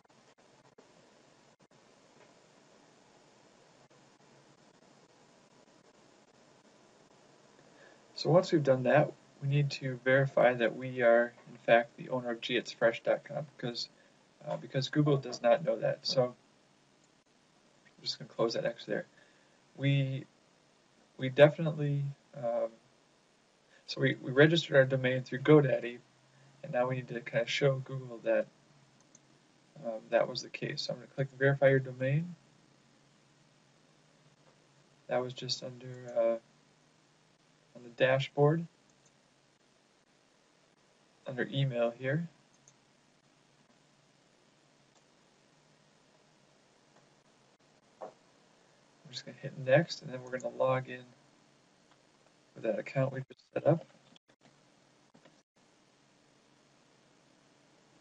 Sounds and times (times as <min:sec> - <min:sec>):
Inside, small room: 0:00.0 - 0:58.0
Speech: 0:08.2 - 0:16.4, 0:18.0 - 0:19.1, 0:19.8 - 0:20.3, 0:21.2 - 0:22.8, 0:23.9 - 0:26.0, 0:26.6 - 0:28.5, 0:29.8 - 0:32.4, 0:35.1 - 0:36.4, 0:37.8 - 0:38.7, 0:41.3 - 0:42.3, 0:49.1 - 0:51.1, 0:52.6 - 0:53.8
Clicking: 0:29.0 - 0:29.3, 0:38.9 - 0:39.2, 0:42.5 - 0:42.8.